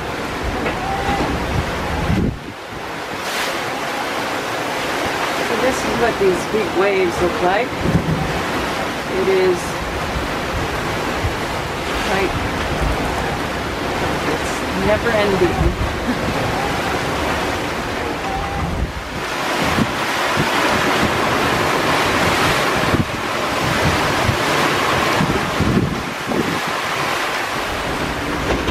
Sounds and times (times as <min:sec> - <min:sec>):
Ocean: 0:00.0 - 0:28.7
Sailboat, sailing ship: 0:00.0 - 0:28.7
Speech: 0:05.5 - 0:07.7, 0:09.2 - 0:09.8, 0:12.1 - 0:12.3, 0:14.3 - 0:15.8.